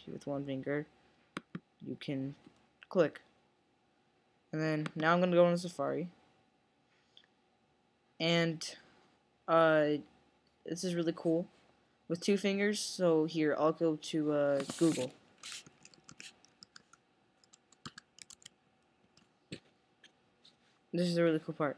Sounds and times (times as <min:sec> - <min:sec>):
Speech: 0:00.0 - 0:00.9, 0:01.8 - 0:03.3, 0:04.6 - 0:06.2, 0:08.2 - 0:08.9, 0:09.5 - 0:10.1, 0:10.7 - 0:11.5, 0:12.1 - 0:15.1, 0:21.0 - 0:21.7.